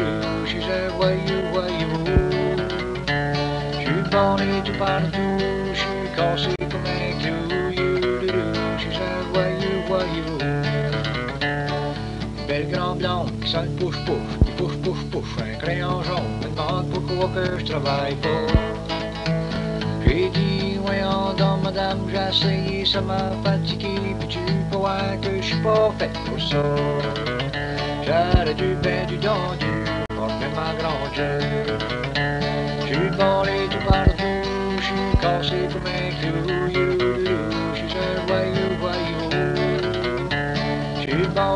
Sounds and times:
Music: 0.0 - 41.5.

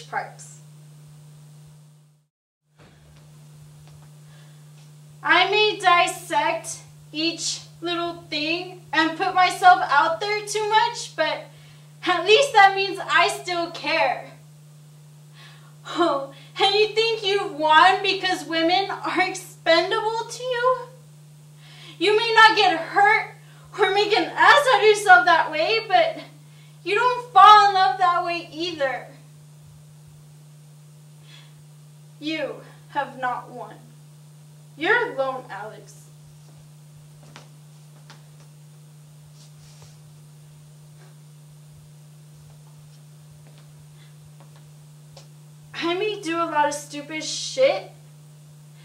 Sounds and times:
Narration, monologue: 3.2 - 42.0, 42.7 - 48.8.

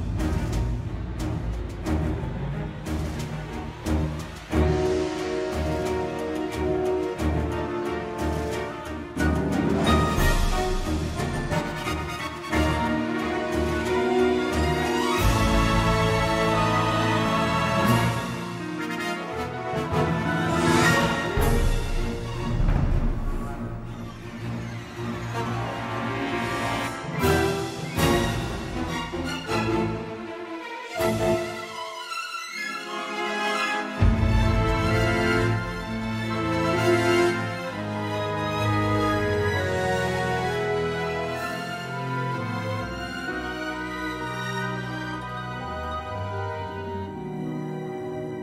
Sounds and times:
Music: 0.0 - 48.4.

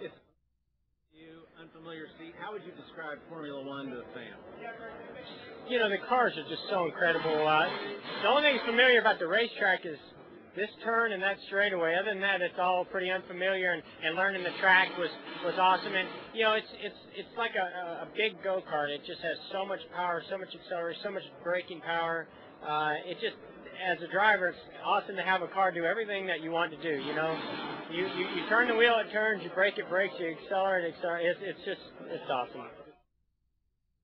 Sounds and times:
Speech: 1.2 - 32.9.

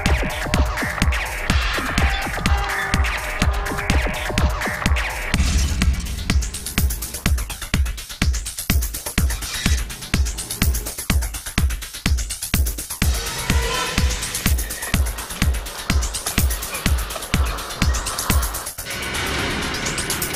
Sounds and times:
Music: 0.0 - 20.3.

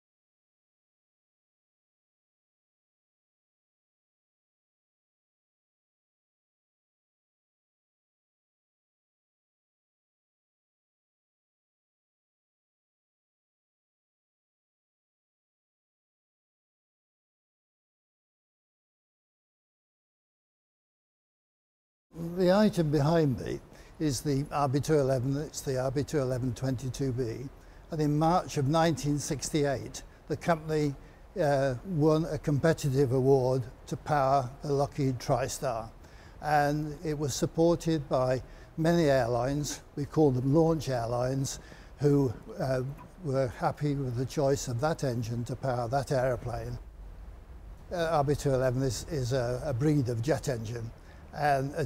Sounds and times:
Speech: 22.2 - 46.8, 47.9 - 51.8.

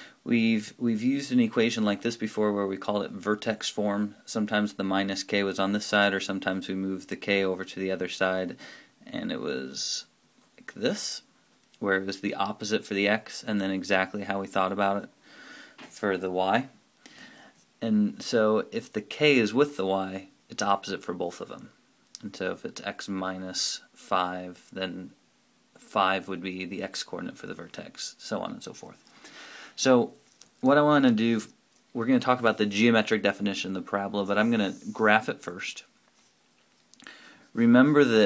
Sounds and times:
Speech: 0.2 - 15.2, 15.9 - 16.8, 17.8 - 25.2, 25.8 - 29.0, 29.8 - 35.9, 37.5 - 38.2.

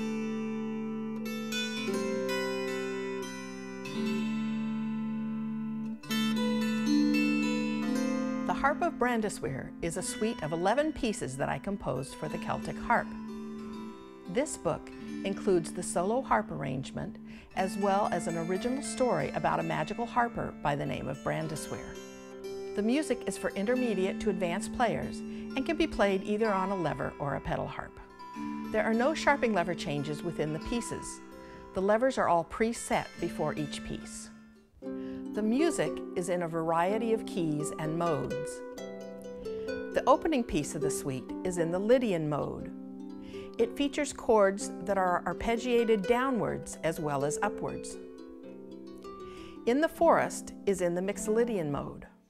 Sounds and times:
Music: 0.0 - 52.2
Speech: 8.5 - 13.1, 14.3 - 22.0, 22.8 - 28.0, 28.7 - 31.2, 31.8 - 34.3, 35.4 - 38.6, 40.0 - 42.7, 43.6 - 48.0, 49.7 - 52.1.

